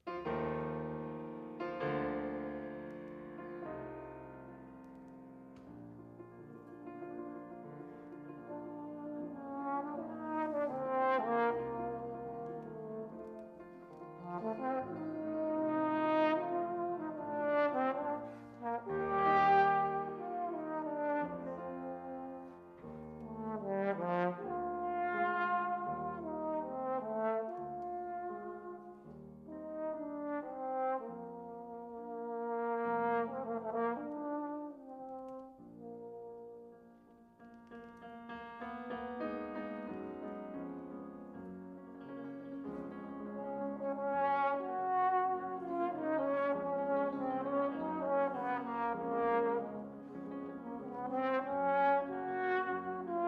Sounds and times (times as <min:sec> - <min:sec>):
Piano: 0:00.0 - 0:53.2
Trombone: 0:08.0 - 0:36.7, 0:42.2 - 0:53.2.